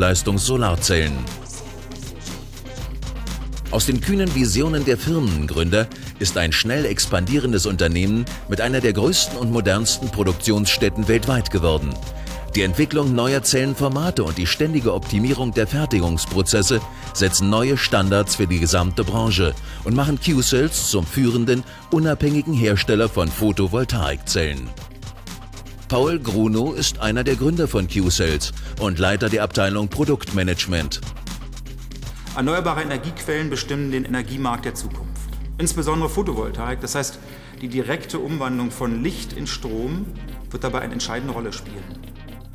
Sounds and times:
Speech: 0.0 - 2.5, 3.7 - 24.8, 25.9 - 31.1, 32.3 - 42.0
Music: 0.0 - 42.5.

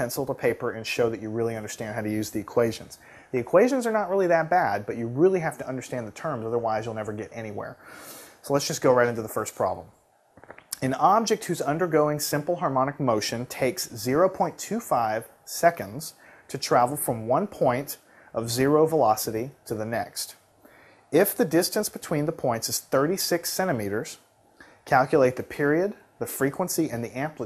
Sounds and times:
Speech: 0.0 - 7.8, 8.4 - 10.0, 10.8 - 20.4, 21.1 - 24.3, 24.9 - 27.4.

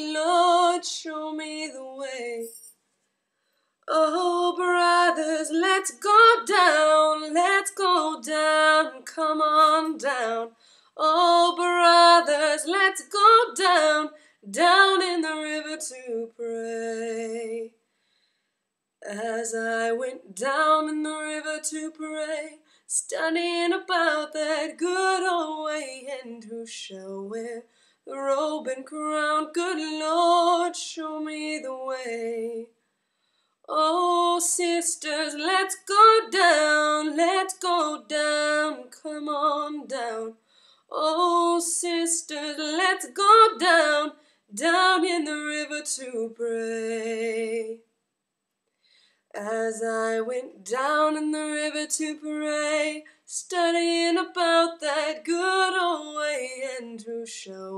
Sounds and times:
Female singing: 0.0 - 2.7, 3.9 - 17.8, 19.0 - 32.7, 33.7 - 47.9, 49.4 - 57.7.

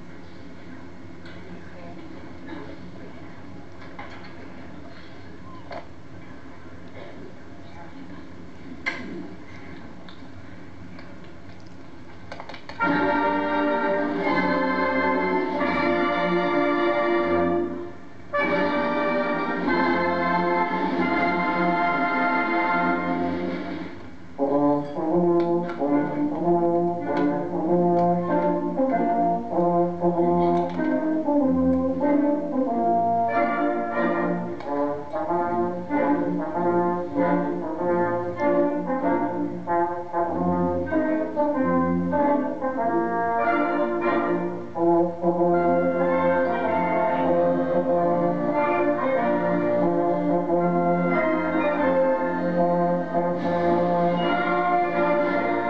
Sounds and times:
Speech: 1.4 - 3.8, 6.9 - 9.4.

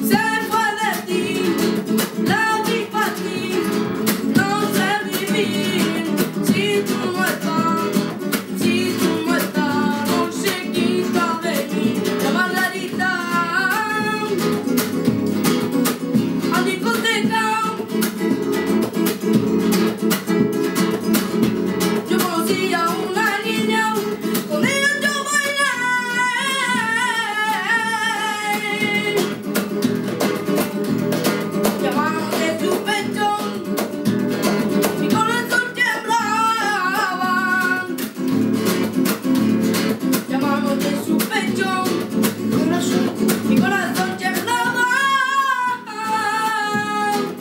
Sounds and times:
Music: 0.0 - 47.4.

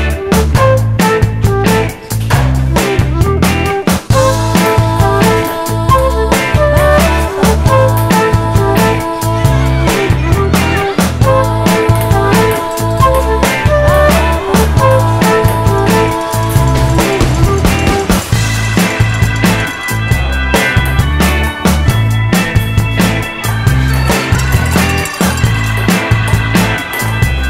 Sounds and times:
Music: 0.0 - 27.5.

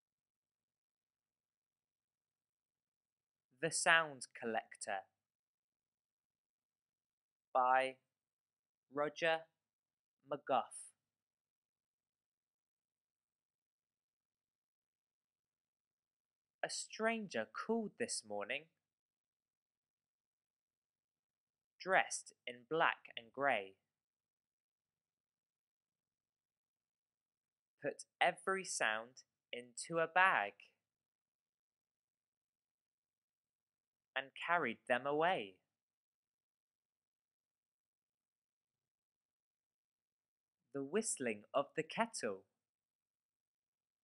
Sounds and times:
Speech: 3.6 - 5.1, 7.6 - 8.1, 9.0 - 9.6, 10.3 - 10.9, 16.6 - 18.8, 21.8 - 23.8, 27.8 - 30.7, 34.2 - 35.6, 40.8 - 42.5.

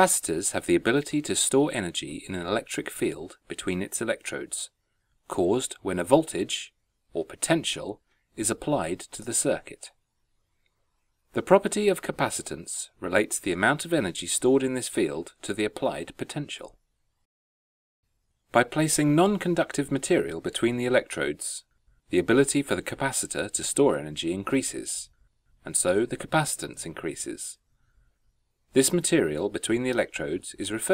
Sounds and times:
Speech: 0.0 - 10.0, 11.4 - 16.8, 18.5 - 27.6, 28.7 - 30.9.

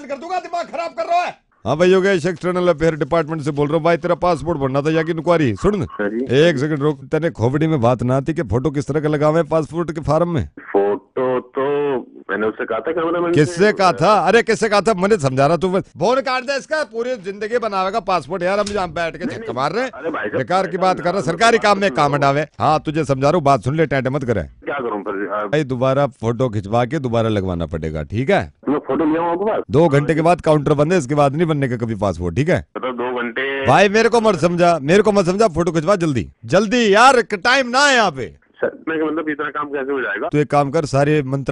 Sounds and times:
Speech: 0.0 - 41.5.

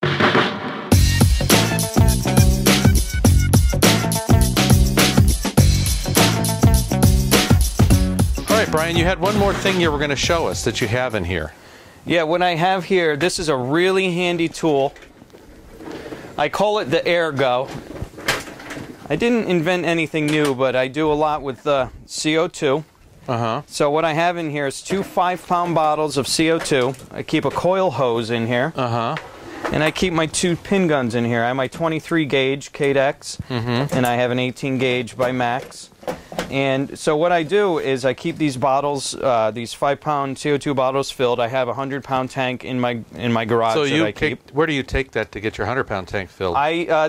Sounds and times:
Speech: 8.5 - 15.0, 16.4 - 17.8, 19.1 - 35.9, 36.5 - 47.0.

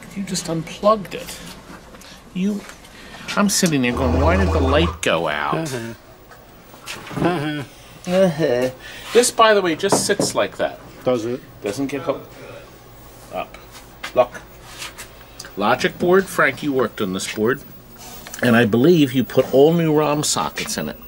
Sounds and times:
Speech: 0.0 - 1.4, 2.4 - 2.7, 3.3 - 6.0, 7.3 - 12.6, 15.6 - 17.7, 18.4 - 21.0.

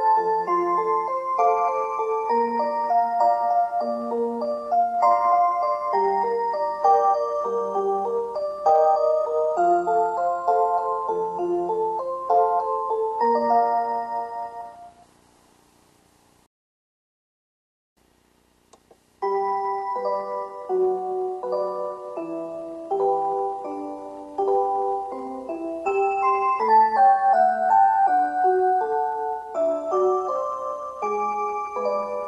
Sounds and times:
Music: 0.0 - 15.1, 19.2 - 32.2.

